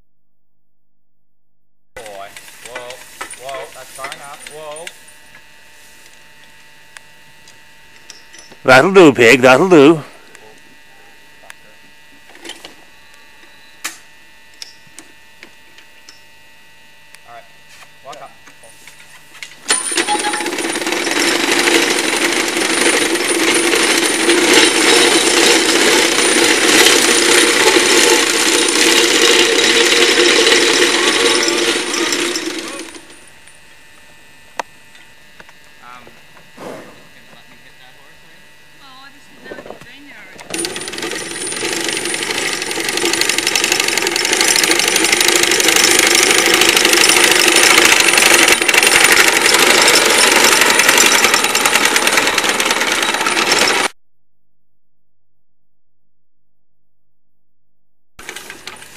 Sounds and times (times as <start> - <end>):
Speech: 2.0 - 4.9, 8.6 - 11.8, 17.2 - 18.4, 35.8 - 36.2, 37.2 - 40.4.